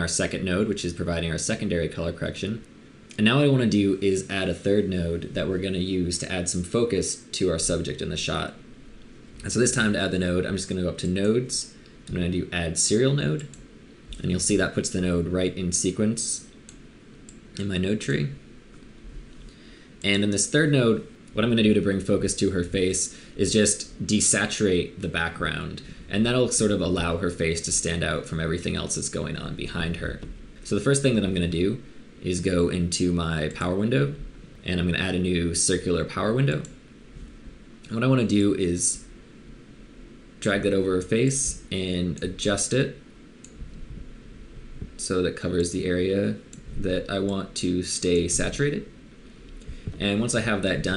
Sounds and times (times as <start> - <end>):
Speech: 0.0 - 8.6, 9.4 - 13.6, 14.2 - 16.6, 17.6 - 18.5, 20.0 - 36.8, 37.9 - 39.1, 40.4 - 43.0, 45.0 - 49.0, 50.0 - 50.9.